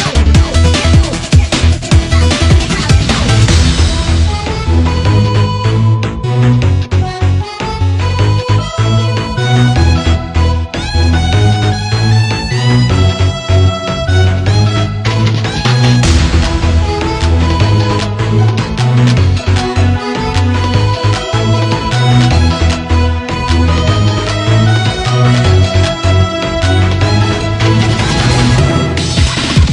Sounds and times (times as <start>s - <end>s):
Video game music: 0.0s - 29.7s.